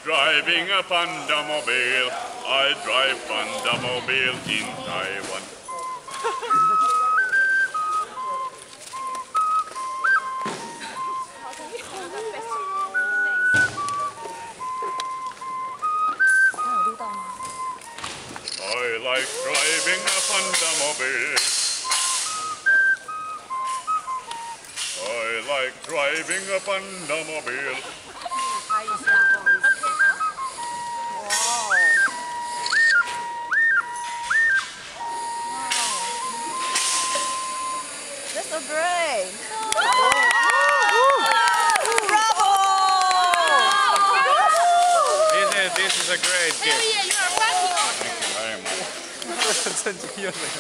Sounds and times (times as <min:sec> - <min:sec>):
Flute: 0:00.0 - 0:49.8.